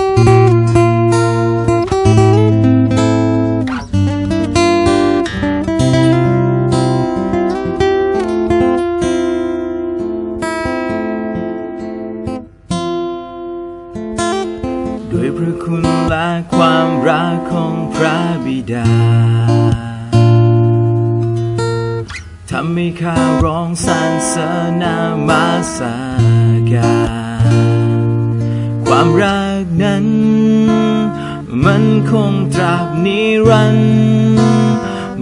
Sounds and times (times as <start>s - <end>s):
Acoustic guitar: 0.0s - 35.2s
Strum: 0.0s - 35.2s.